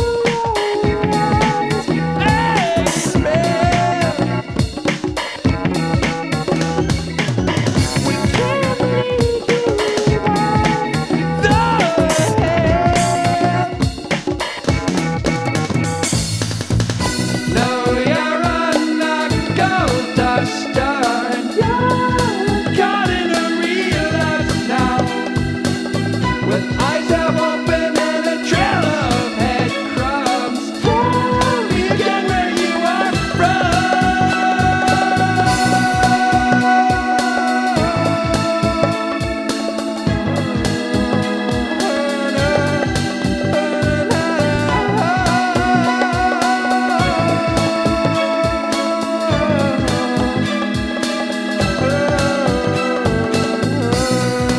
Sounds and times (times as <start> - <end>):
Music: 0.0 - 54.5.